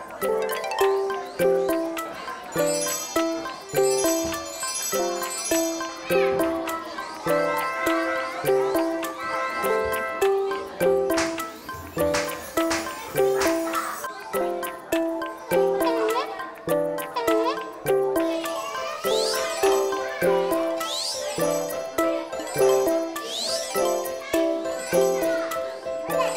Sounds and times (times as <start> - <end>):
Music: 0.0 - 26.3
Child speech, kid speaking: 12.8 - 26.3.